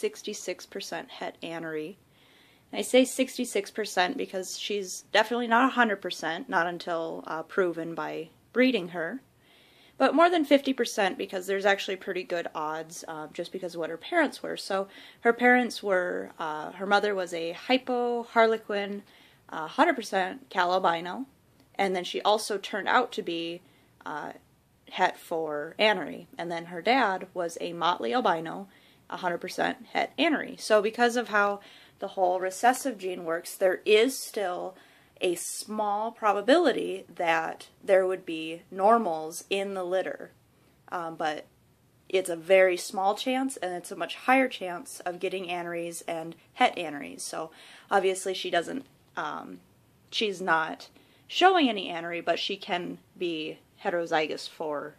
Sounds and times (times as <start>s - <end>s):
Speech: 0.0s - 2.0s, 2.7s - 9.3s, 10.0s - 41.5s, 42.1s - 54.9s
Inside, small room: 0.0s - 54.9s.